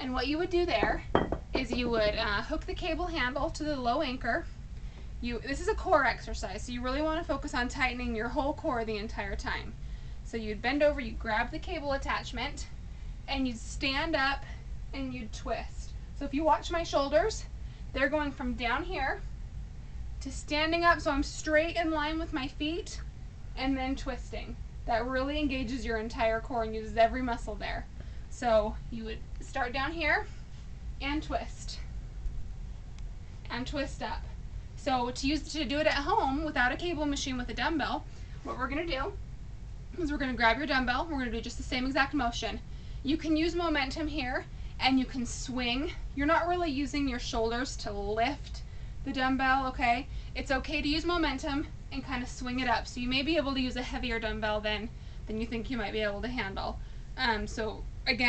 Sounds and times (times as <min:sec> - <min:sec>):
Speech: 0:00.0 - 0:04.5, 0:05.2 - 0:12.7, 0:13.3 - 0:19.3, 0:20.2 - 0:30.3, 0:31.0 - 0:31.9, 0:33.5 - 0:39.2, 0:40.0 - 0:58.2.